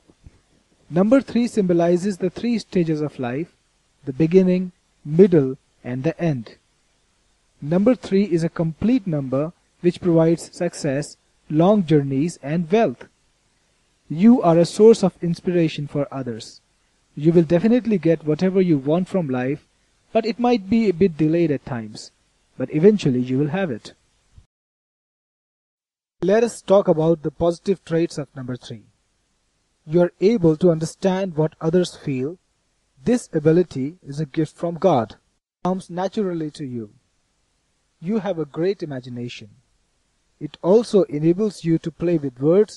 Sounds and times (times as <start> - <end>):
Narration, monologue: 0.0 - 24.5, 26.2 - 42.7.